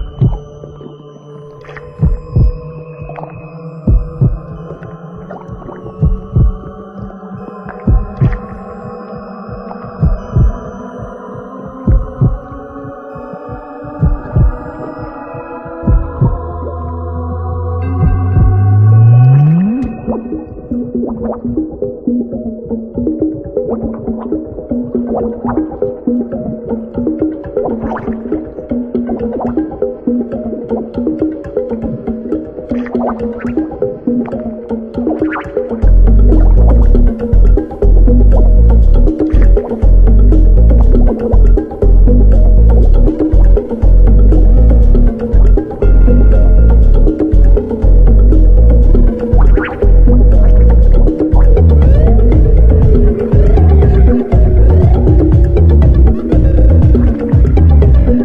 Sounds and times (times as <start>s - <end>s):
Background music: 0.0s - 58.2s.